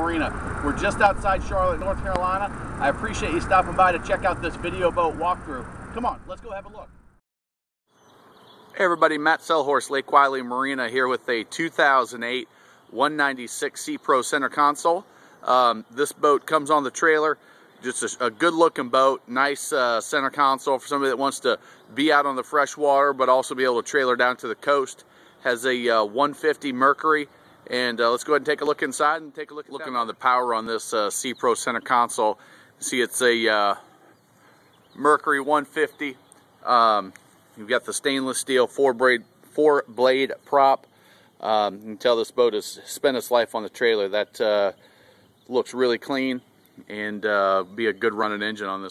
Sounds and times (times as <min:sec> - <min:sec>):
Speech: 0:00.0 - 0:06.9, 0:08.8 - 0:33.9, 0:35.0 - 0:40.8, 0:41.4 - 0:44.8, 0:45.5 - 0:48.9.